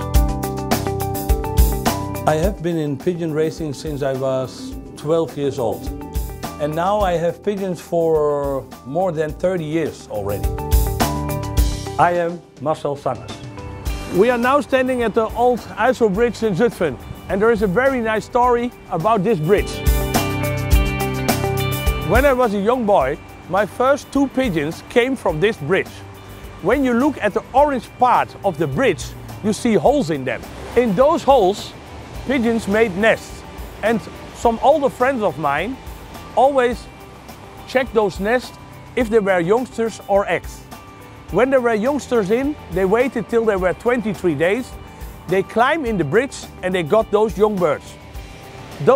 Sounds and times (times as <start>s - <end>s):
Music: 0.0s - 48.9s
Speech: 2.3s - 5.9s, 6.6s - 10.5s, 12.0s - 13.4s, 14.1s - 19.8s, 22.1s - 26.0s, 26.6s - 31.7s, 32.3s - 35.8s, 36.4s - 36.9s, 37.7s - 40.6s, 41.3s - 44.7s, 45.3s - 48.0s.